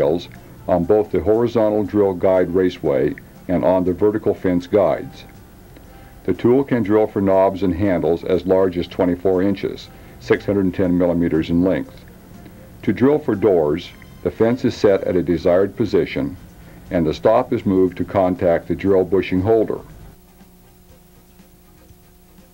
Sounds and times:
Speech: 0.0s - 5.3s, 6.2s - 12.0s, 12.8s - 19.9s
Music: 0.0s - 22.5s.

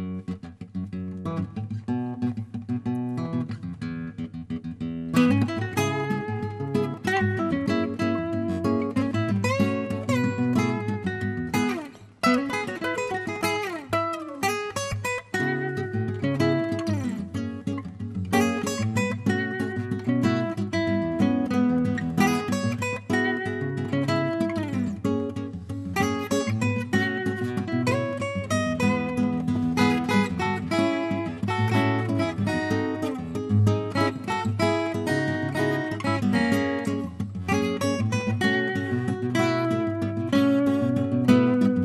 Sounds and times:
Acoustic guitar: 0.0s - 41.8s.

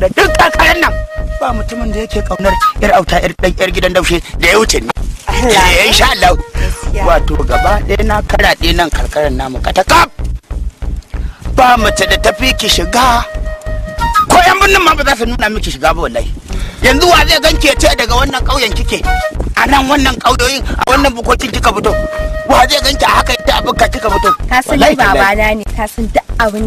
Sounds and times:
Speech: 0.0s - 10.2s, 11.6s - 13.3s, 14.3s - 26.6s
Music: 0.0s - 26.6s
Outside, rural or natural: 0.0s - 26.6s.

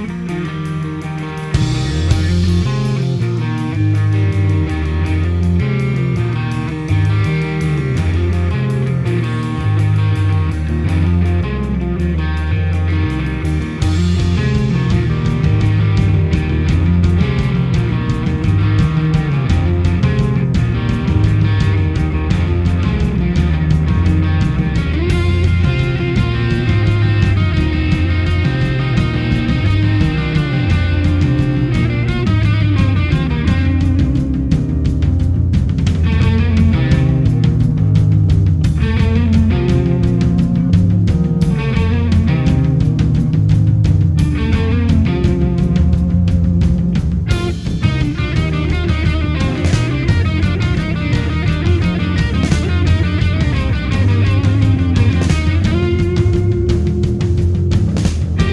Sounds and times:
Progressive rock: 0.0s - 58.5s.

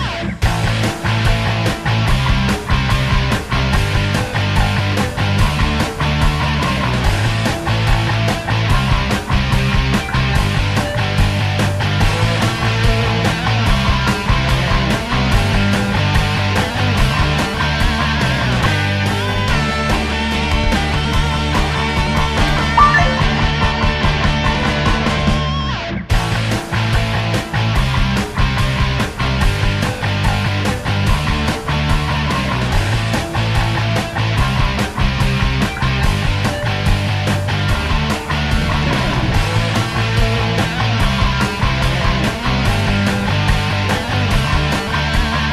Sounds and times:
Music: 0.0s - 45.5s.

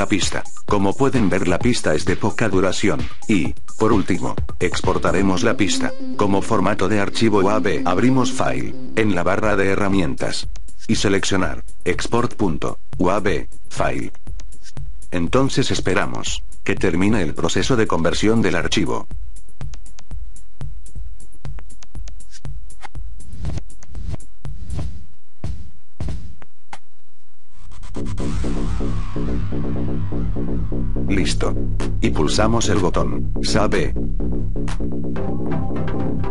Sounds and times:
Electronica: 0.0s - 25.0s, 27.5s - 36.3s.

